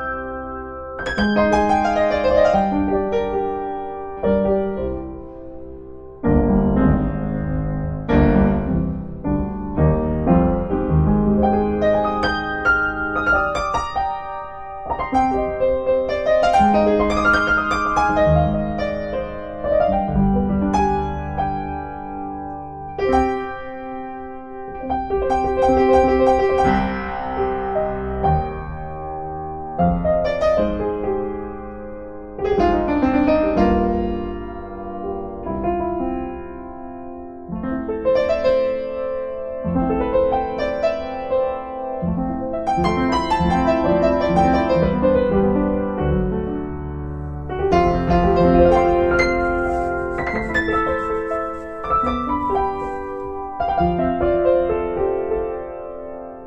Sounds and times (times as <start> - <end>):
Piano: 0.0 - 56.4.